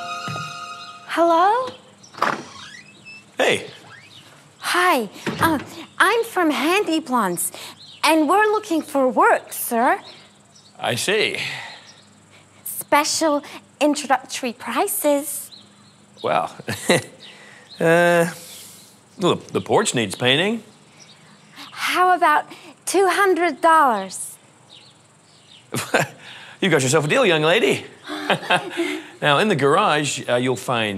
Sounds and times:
Outside, rural or natural: 0:01.1 - 0:30.0.

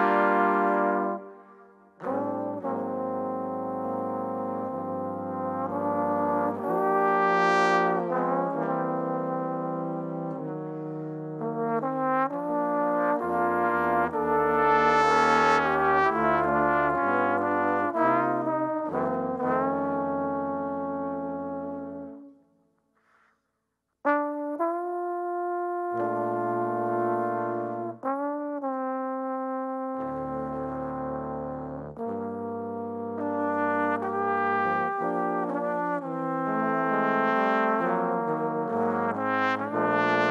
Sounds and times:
Trombone: 0:00.0 - 0:22.3, 0:24.1 - 0:40.3.

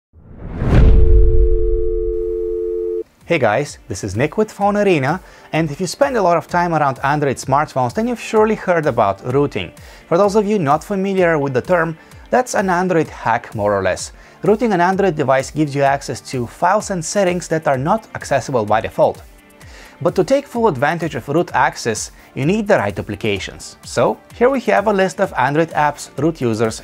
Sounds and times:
Music: 0:03.0 - 0:26.8
Speech: 0:03.2 - 0:19.2, 0:20.0 - 0:26.8.

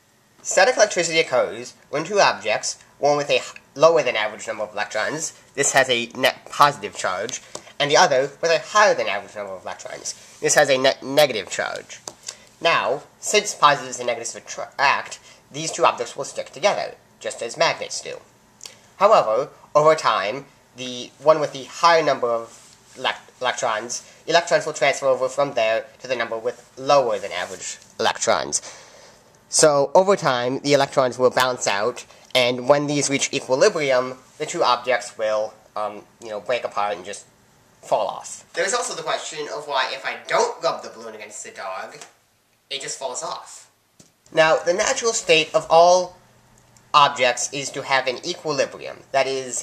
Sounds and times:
Speech: 0:00.4 - 0:18.3, 0:19.0 - 0:28.7, 0:29.5 - 0:46.2, 0:46.9 - 0:49.6.

